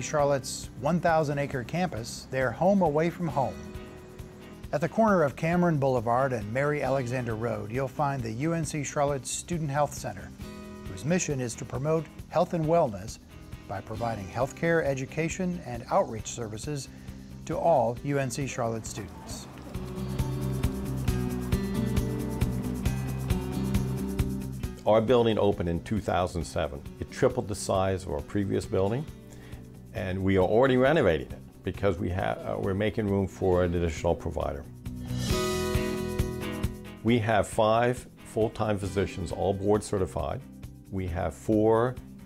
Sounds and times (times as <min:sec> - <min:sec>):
Speech: 0:00.0 - 0:03.6, 0:04.7 - 0:10.3, 0:10.9 - 0:19.6, 0:24.8 - 0:29.1, 0:29.9 - 0:34.7, 0:37.0 - 0:42.0
Music: 0:00.0 - 0:42.2.